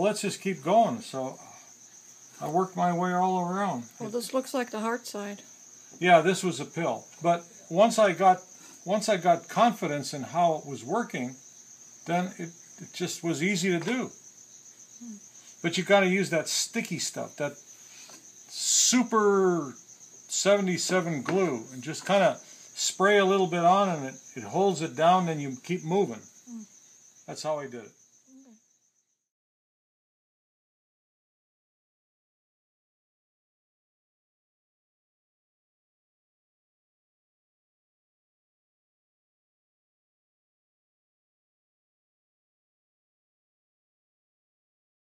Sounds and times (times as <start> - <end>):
Speech: 2.4 - 5.4, 6.0 - 11.4, 12.1 - 14.1, 15.0 - 17.6, 18.5 - 26.2, 27.3 - 27.9.